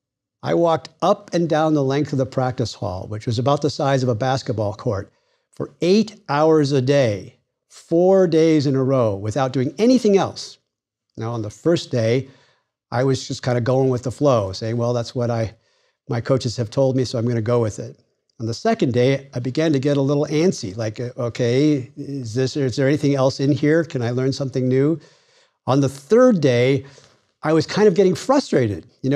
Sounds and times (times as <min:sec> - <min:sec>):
Speech: 0:00.4 - 0:10.6, 0:11.2 - 0:12.3, 0:12.9 - 0:25.0, 0:25.7 - 0:29.1.